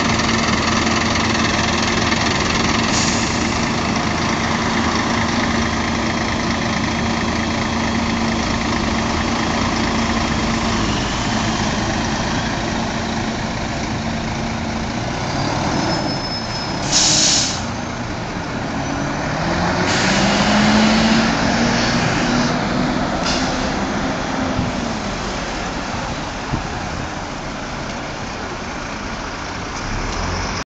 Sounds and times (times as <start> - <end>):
Bus: 0.0 - 30.7.